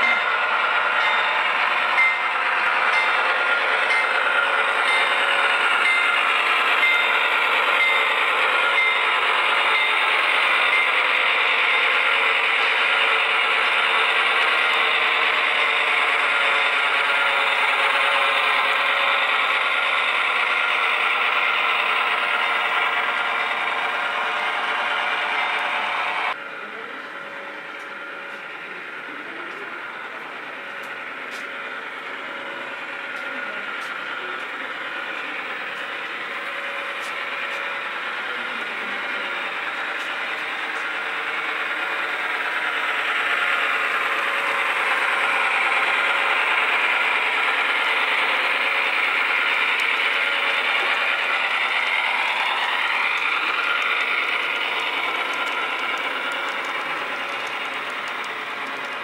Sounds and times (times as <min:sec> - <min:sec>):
Vehicle: 0:26.3 - 0:31.6, 0:33.2 - 0:39.3.